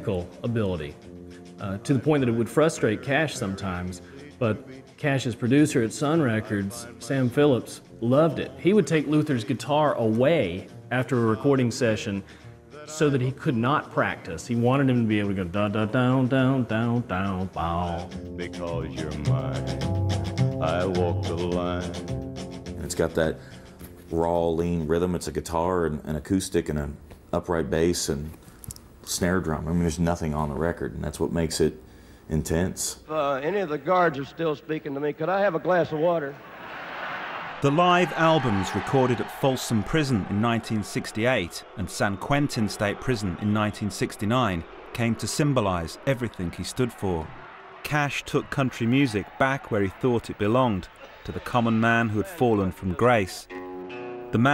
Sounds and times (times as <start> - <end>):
Speech: 0.0 - 1.0, 1.6 - 12.2, 12.8 - 19.7, 20.6 - 22.0, 22.8 - 23.4, 24.1 - 28.4, 29.1 - 36.4, 37.6 - 53.5
Music: 0.0 - 26.8, 38.4 - 47.2, 48.7 - 54.5.